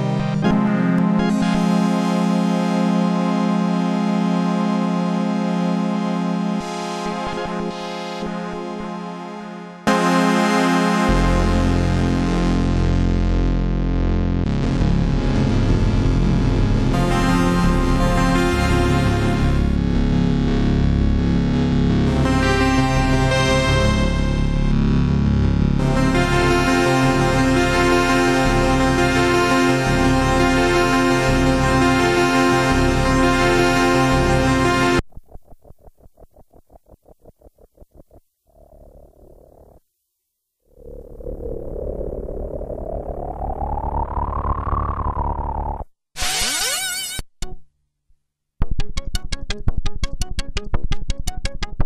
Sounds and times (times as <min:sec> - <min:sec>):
Synthesizer: 0:00.0 - 0:35.2, 0:40.8 - 0:47.6.